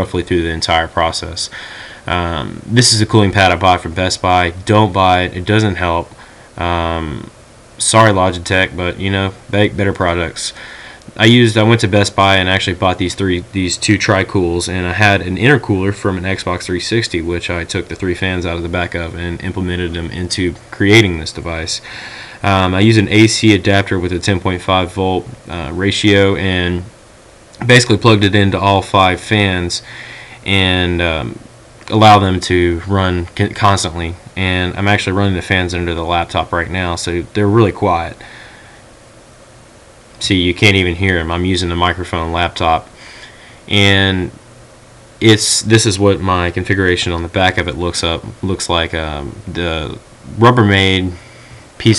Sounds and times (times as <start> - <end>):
Speech: 0.0 - 27.0, 27.6 - 38.3, 40.2 - 42.9, 43.7 - 44.4, 45.2 - 51.2.